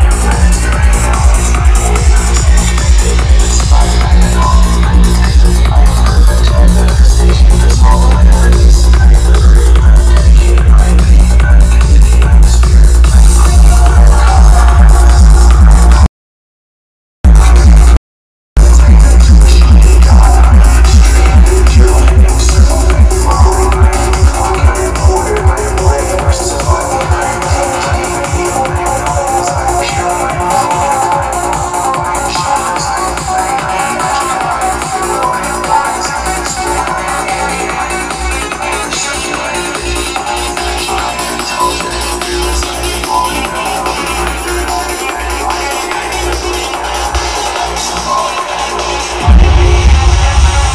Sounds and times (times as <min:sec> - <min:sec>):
Music: 0:00.0 - 0:16.1, 0:17.3 - 0:18.0, 0:18.6 - 0:50.7.